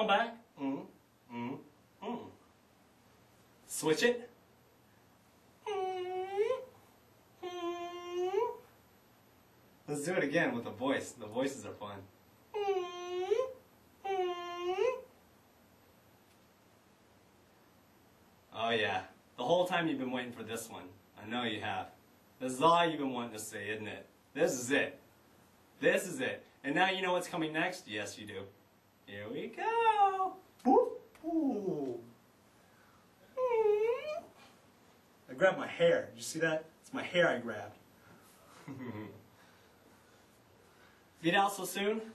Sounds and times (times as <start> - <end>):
Speech: 0.0 - 2.4, 3.7 - 4.4, 9.9 - 12.1, 18.5 - 25.0, 25.8 - 32.1, 35.3 - 37.8, 41.2 - 42.1.